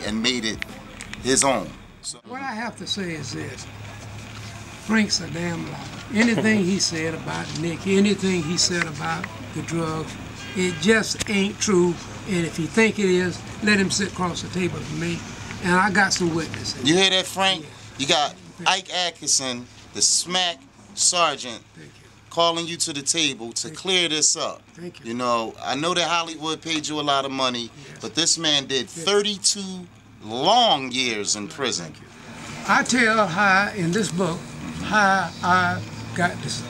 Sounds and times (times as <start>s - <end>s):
Speech: 0.0s - 36.6s.